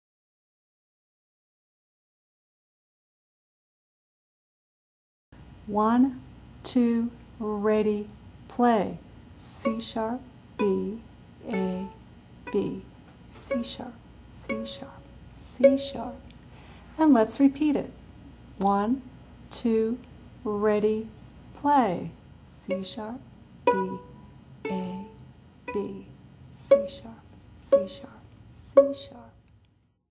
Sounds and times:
Speech: 0:05.7 - 0:16.2, 0:17.0 - 0:18.0, 0:18.6 - 0:24.1, 0:24.7 - 0:29.4
Pizzicato: 0:09.4 - 0:16.3, 0:22.5 - 0:29.3.

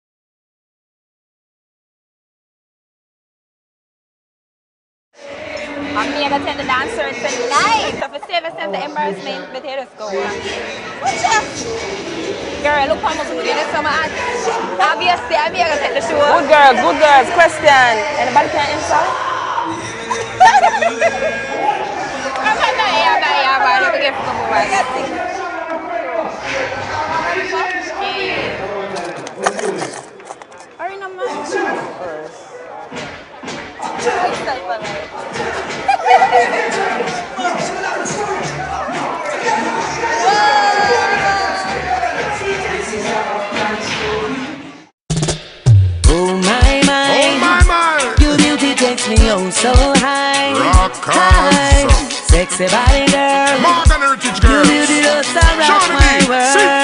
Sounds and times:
Music: 0:05.2 - 0:08.1, 0:10.0 - 0:25.5, 0:32.9 - 0:56.8.

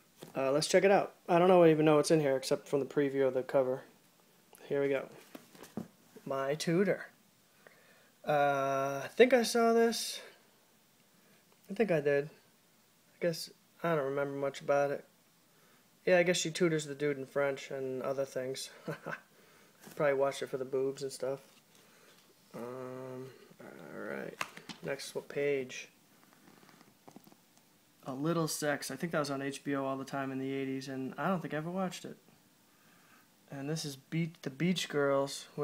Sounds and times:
Speech: 0:00.3 - 0:03.9, 0:04.6 - 0:05.2, 0:06.2 - 0:07.2, 0:08.2 - 0:10.4, 0:11.7 - 0:12.4, 0:13.2 - 0:15.1, 0:16.0 - 0:19.2, 0:19.9 - 0:21.5, 0:22.5 - 0:26.0, 0:28.0 - 0:32.2, 0:33.5 - 0:35.6.

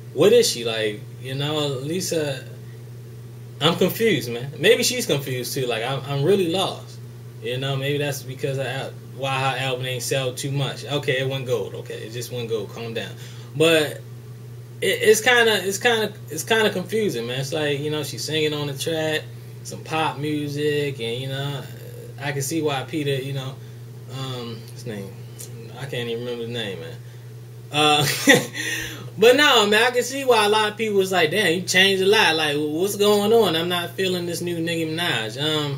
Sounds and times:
Speech: 0:00.2 - 0:02.6, 0:03.6 - 0:14.0, 0:14.8 - 0:27.0, 0:27.7 - 0:28.4, 0:29.2 - 0:35.7.

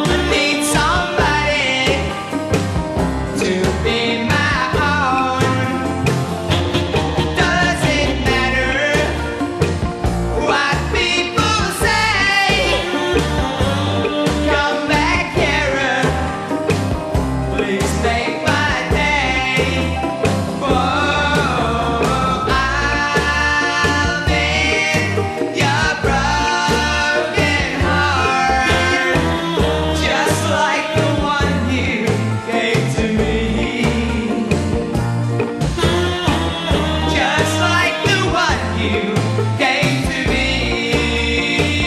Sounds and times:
Jazz: 0:00.0 - 0:41.8.

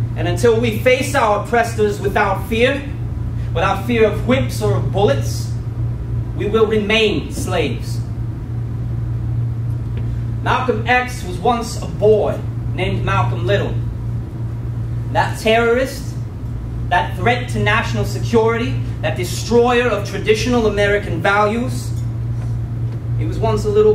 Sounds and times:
Speech: 0:00.2 - 0:03.0, 0:03.6 - 0:05.6, 0:06.4 - 0:08.1, 0:10.4 - 0:13.9, 0:15.1 - 0:16.2, 0:16.9 - 0:22.0, 0:23.2 - 0:23.9.

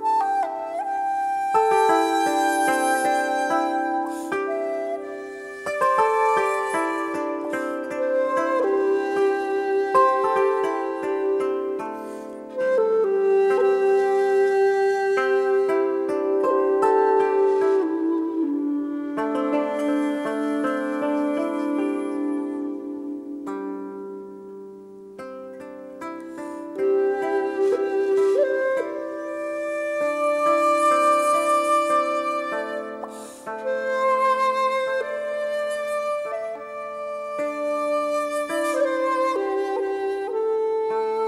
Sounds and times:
Harp: 0:00.0 - 0:41.2.

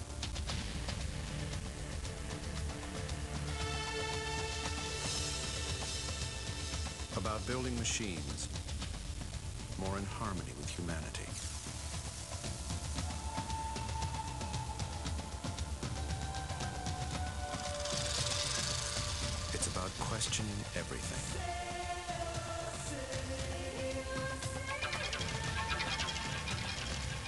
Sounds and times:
Speech: 0:07.2 - 0:08.5, 0:09.8 - 0:11.5, 0:19.5 - 0:21.5.

